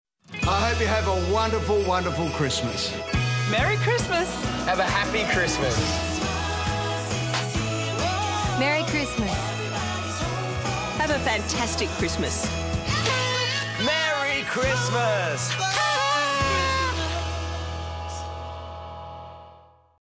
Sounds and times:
Music: 0.2s - 20.0s.

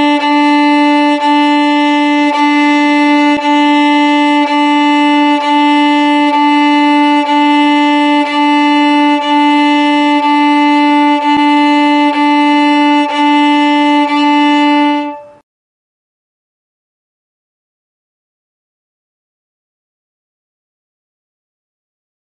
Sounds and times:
Violin, fiddle: 0.0s - 15.4s.

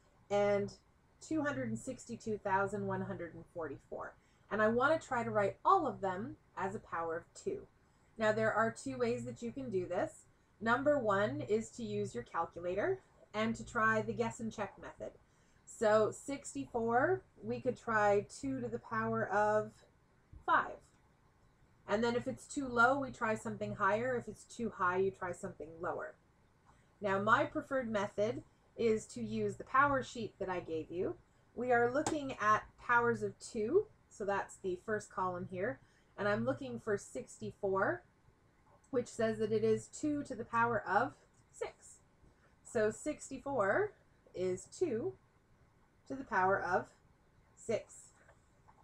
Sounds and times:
Speech: 0.3s - 15.1s, 15.7s - 19.8s, 20.4s - 20.8s, 21.9s - 26.1s, 27.0s - 38.0s, 39.0s - 42.0s, 42.7s - 45.1s, 46.1s - 46.9s, 47.6s - 48.1s.

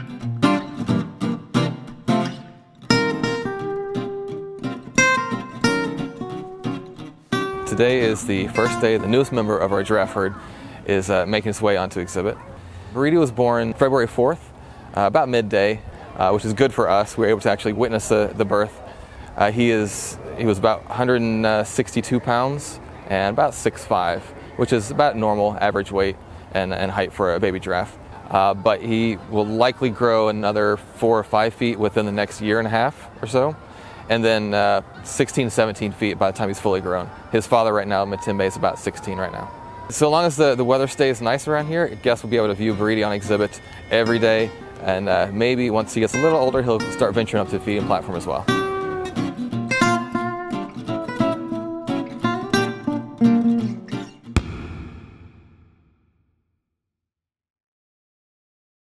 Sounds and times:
Speech: 7.7s - 48.5s.

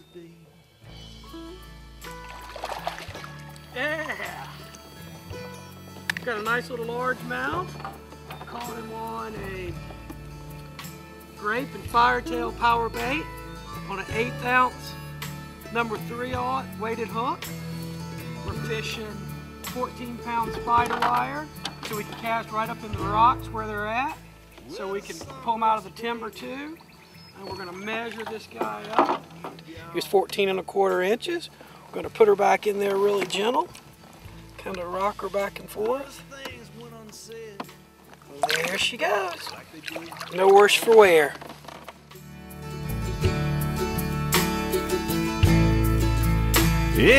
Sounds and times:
Music: 0.0s - 47.1s
Speech: 11.4s - 13.2s, 18.5s - 26.8s, 27.4s - 33.7s, 34.6s - 37.6s, 38.3s - 41.4s, 47.0s - 47.1s.

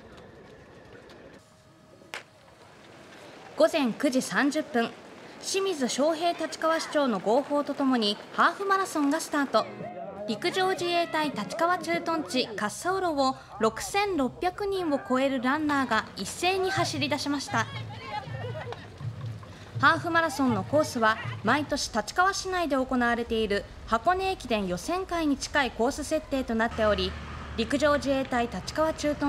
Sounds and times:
Run: 0.0s - 1.5s, 2.2s - 12.4s, 15.5s - 22.4s
Outside, urban or manmade: 0.0s - 29.2s
Speech: 3.6s - 18.6s, 19.8s - 29.2s.

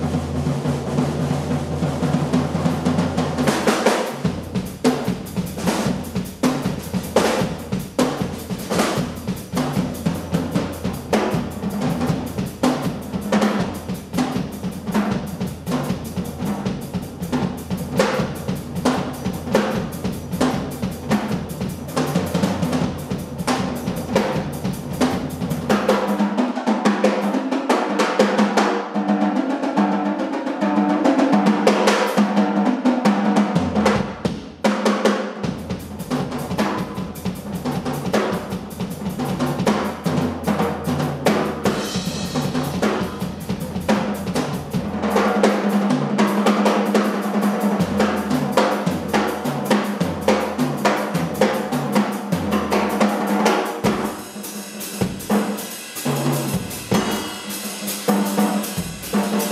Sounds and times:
Drum: 0.0s - 59.5s
Drum kit: 0.0s - 59.5s
Inside, large room or hall: 0.0s - 59.5s.

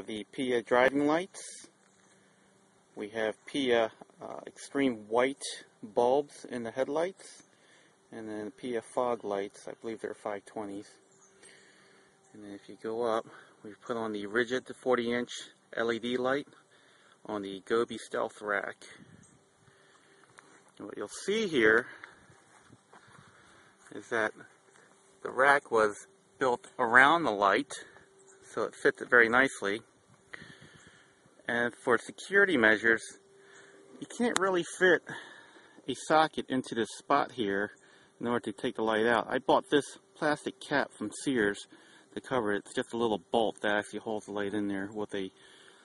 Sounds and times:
Speech: 0.0s - 1.7s, 3.0s - 7.4s, 8.1s - 11.0s, 12.3s - 16.6s, 17.3s - 19.0s, 20.8s - 22.0s, 23.9s - 24.5s, 25.2s - 29.9s, 31.5s - 33.2s, 34.0s - 35.2s, 35.9s - 45.4s
Outside, rural or natural: 0.0s - 45.8s.

